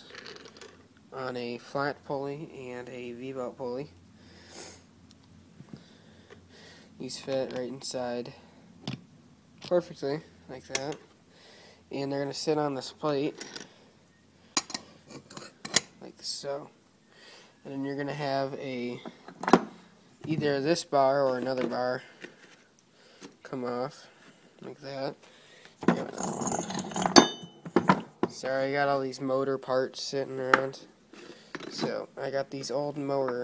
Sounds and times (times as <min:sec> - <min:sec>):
Speech: 0:01.1 - 0:03.9, 0:07.0 - 0:08.4, 0:09.7 - 0:11.0, 0:11.9 - 0:13.4, 0:16.0 - 0:16.8, 0:17.6 - 0:19.0, 0:20.2 - 0:22.1, 0:23.4 - 0:25.2, 0:28.3 - 0:30.9, 0:31.7 - 0:33.4.